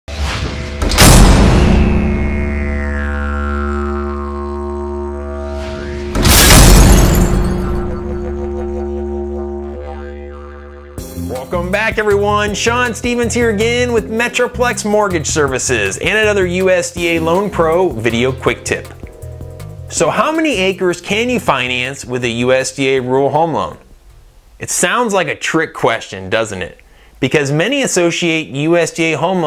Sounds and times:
Music: 0.1s - 6.6s, 11.0s - 22.5s.

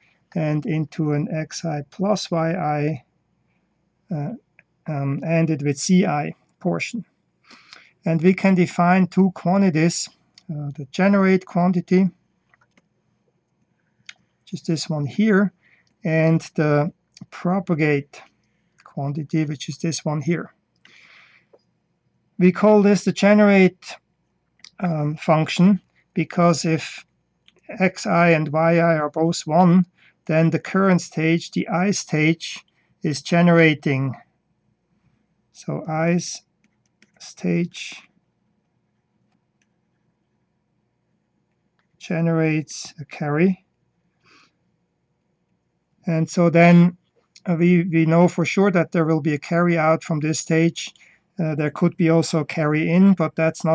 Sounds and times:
Speech: 0.4s - 3.0s, 4.1s - 7.1s, 8.0s - 12.2s, 14.5s - 20.5s, 22.4s - 24.0s, 24.7s - 27.0s, 27.7s - 34.3s, 35.6s - 36.4s, 37.2s - 38.1s, 42.0s - 43.7s, 46.1s - 53.7s.

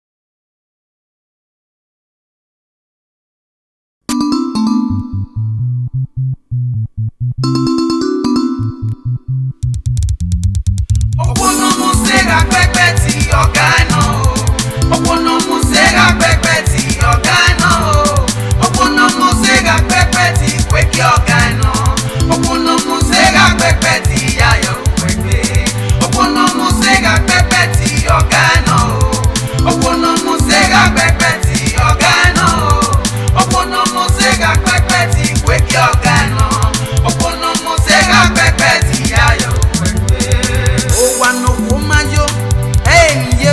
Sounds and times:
Music: 4.1s - 43.5s.

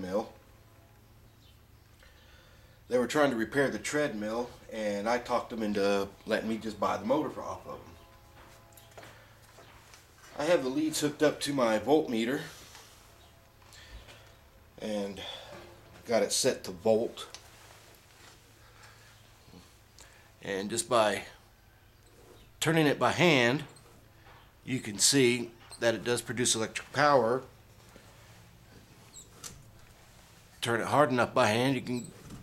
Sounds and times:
Speech: 0.0s - 0.4s, 2.9s - 8.0s, 10.4s - 12.5s, 14.8s - 15.4s, 16.0s - 17.4s, 20.4s - 21.4s, 22.6s - 23.8s, 24.7s - 27.5s, 30.6s - 32.1s.

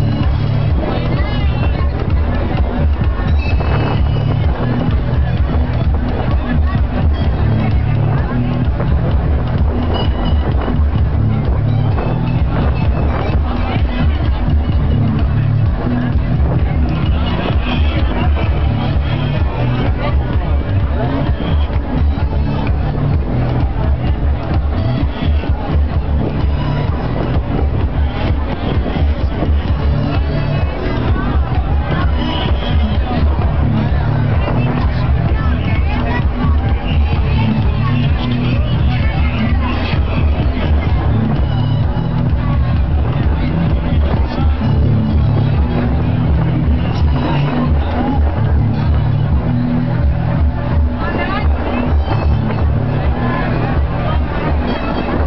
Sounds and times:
Music: 0.0s - 55.2s
Speech: 0.0s - 55.2s
Motorboat, speedboat: 12.6s - 13.7s.

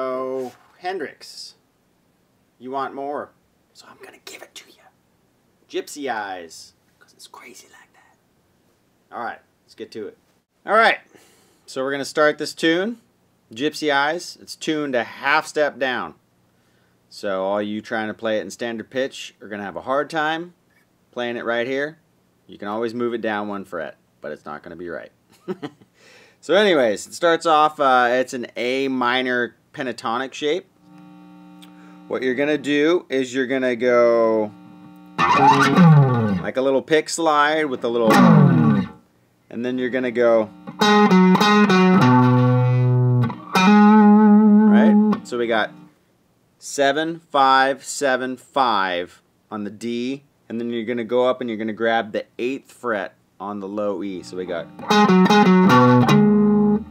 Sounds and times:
Speech: 0.0s - 1.6s, 2.6s - 5.0s, 5.7s - 8.0s, 9.1s - 11.1s, 11.7s - 16.2s, 17.1s - 20.6s, 21.2s - 25.2s, 26.4s - 30.7s, 32.1s - 34.5s, 36.4s - 38.2s, 39.5s - 40.5s, 44.7s - 45.7s, 46.6s - 54.7s.

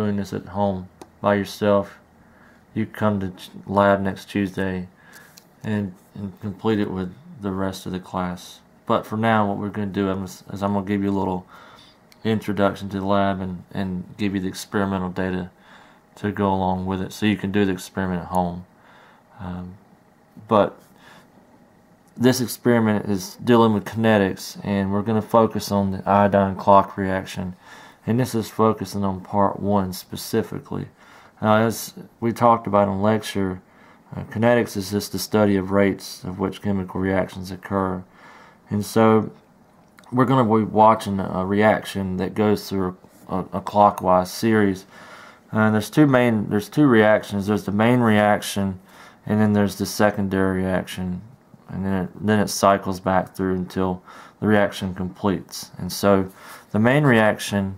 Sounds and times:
Speech: 0.0s - 2.0s, 2.8s - 5.0s, 5.6s - 11.5s, 12.2s - 15.6s, 16.2s - 18.7s, 19.4s - 19.8s, 20.4s - 20.8s, 22.2s - 38.1s, 38.7s - 39.4s, 40.0s - 44.9s, 45.5s - 57.7s.

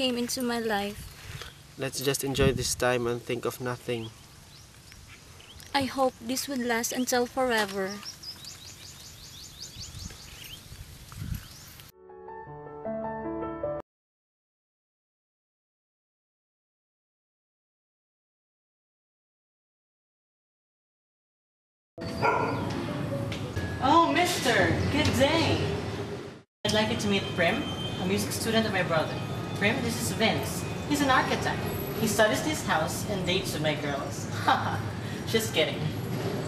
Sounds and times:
Outside, rural or natural: 0.0s - 12.3s, 26.7s - 36.4s
Speech: 1.8s - 4.1s, 5.8s - 8.0s
Music: 11.9s - 13.8s, 22.0s - 24.8s.

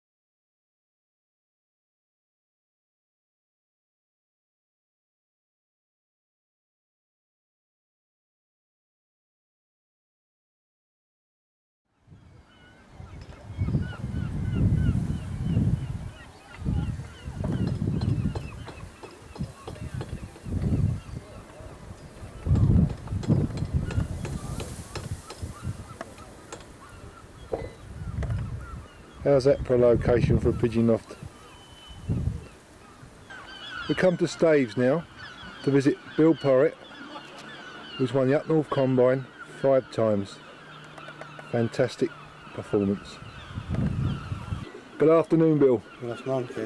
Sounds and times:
Speech: 29.2s - 31.2s, 33.9s - 35.0s, 35.6s - 37.4s, 38.0s - 40.4s, 41.5s - 43.2s, 45.0s - 46.6s.

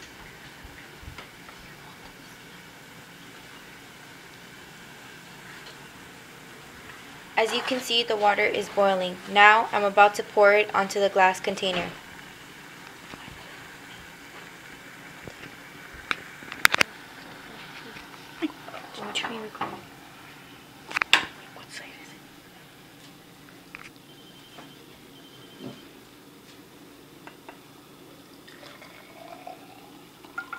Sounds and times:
Speech: 7.4s - 12.0s, 17.4s - 19.8s.

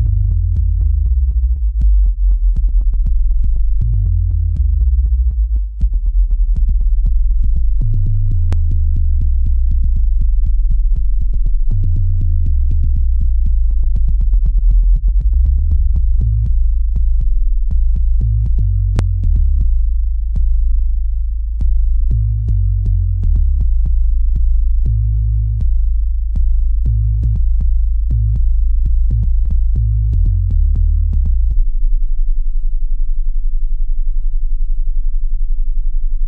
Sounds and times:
Music: 0.0s - 36.2s.

